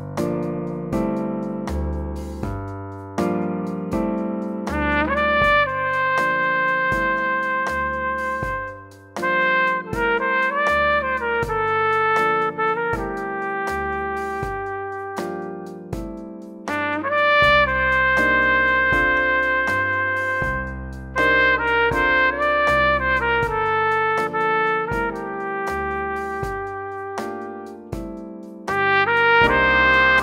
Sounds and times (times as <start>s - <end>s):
Musical instrument: 3.3s - 30.2s.